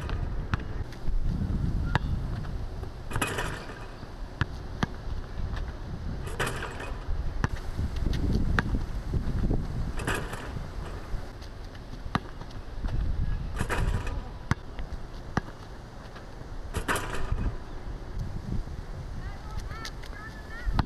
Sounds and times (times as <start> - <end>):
Basketball bounce: 3.1 - 5.0, 6.3 - 7.6, 8.6 - 8.8, 10.0 - 10.6, 13.6 - 14.7, 16.8 - 17.6.